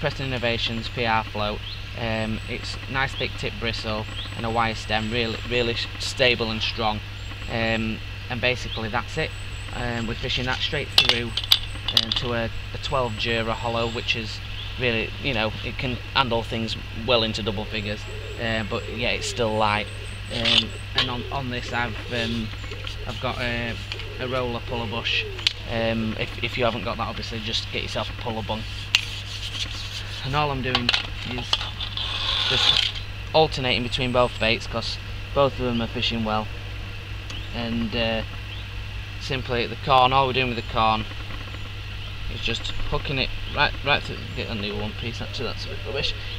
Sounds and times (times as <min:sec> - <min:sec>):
Speech: 0:00.0 - 0:22.5, 0:23.1 - 0:28.7, 0:30.2 - 0:31.6, 0:32.5 - 0:36.5, 0:37.5 - 0:38.3, 0:39.2 - 0:41.1, 0:42.3 - 0:46.3
Outside, rural or natural: 0:00.0 - 0:46.3.